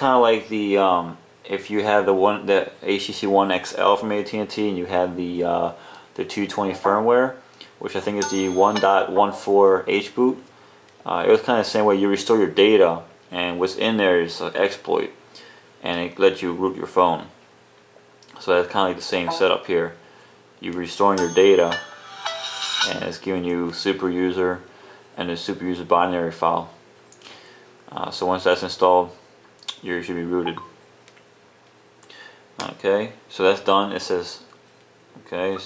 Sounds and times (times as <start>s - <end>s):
Speech: 0.0s - 15.2s, 15.8s - 17.4s, 18.2s - 20.0s, 20.6s - 21.8s, 22.9s - 26.8s, 27.9s - 30.6s, 32.6s - 34.5s, 35.2s - 35.6s.